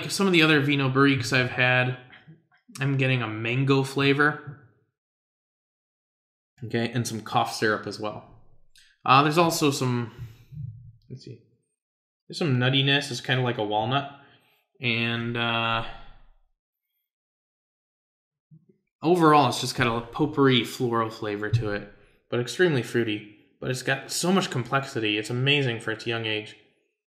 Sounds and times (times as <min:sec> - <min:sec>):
Speech: 0:00.0 - 0:02.1, 0:02.8 - 0:04.5, 0:06.6 - 0:08.4, 0:09.0 - 0:11.4, 0:12.3 - 0:14.2, 0:14.8 - 0:16.1, 0:19.0 - 0:26.6.